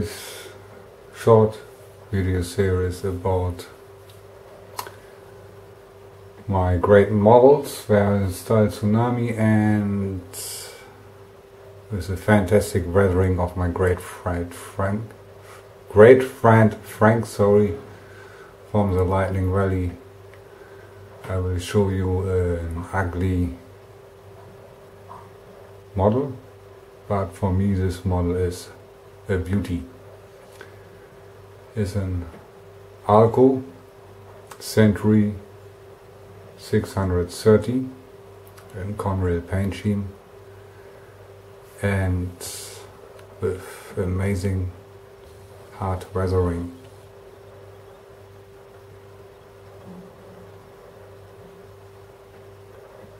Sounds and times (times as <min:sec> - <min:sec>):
Speech: 0:00.0 - 0:03.8, 0:06.4 - 0:10.9, 0:11.9 - 0:15.2, 0:15.9 - 0:17.9, 0:18.7 - 0:20.1, 0:21.2 - 0:23.8, 0:25.9 - 0:30.0, 0:31.7 - 0:33.8, 0:34.5 - 0:35.6, 0:36.6 - 0:40.2, 0:41.7 - 0:44.8, 0:45.7 - 0:46.9.